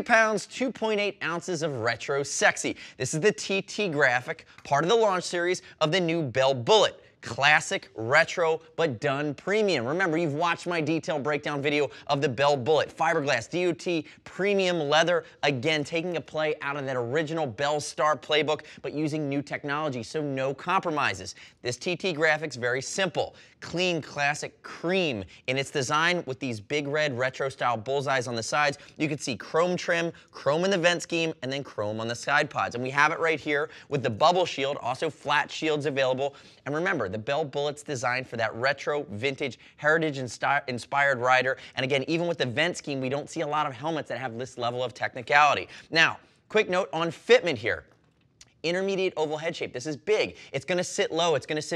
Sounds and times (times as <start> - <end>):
Speech: 0.0 - 51.7.